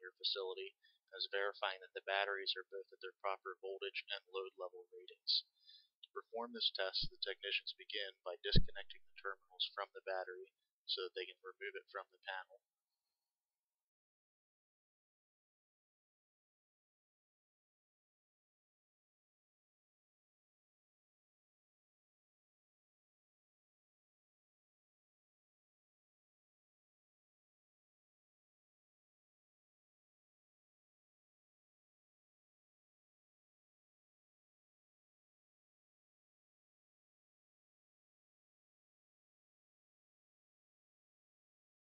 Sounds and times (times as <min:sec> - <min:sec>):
Speech: 0:00.0 - 0:12.7.